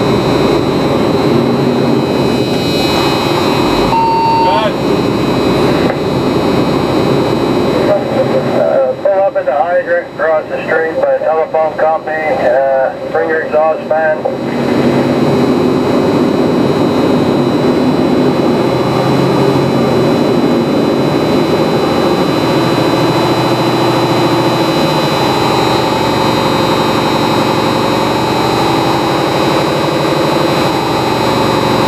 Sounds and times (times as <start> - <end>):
Heavy engine (low frequency): 0.0 - 31.8.